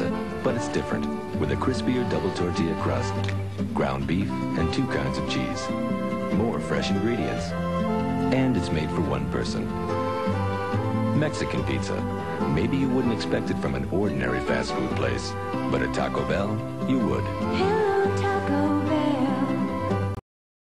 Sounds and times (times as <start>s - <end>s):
Speech: 0.0s - 5.7s, 6.3s - 7.5s, 8.3s - 9.7s, 11.2s - 17.3s
Music: 0.0s - 20.2s.